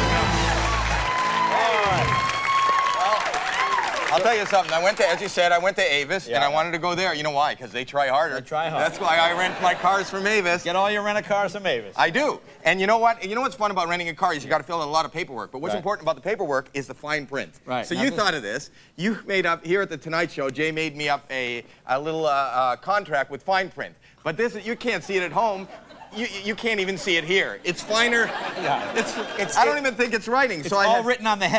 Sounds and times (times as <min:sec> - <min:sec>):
Speech: 0:04.1 - 0:31.5.